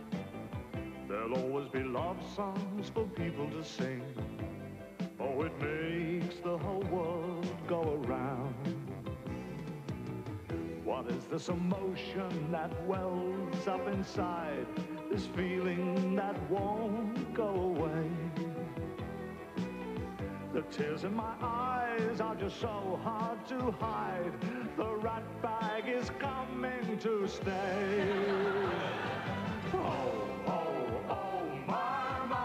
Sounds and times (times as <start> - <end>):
Music: 0.0 - 32.4
Male singing: 1.1 - 4.2, 5.2 - 8.8, 10.8 - 18.6, 20.5 - 32.4.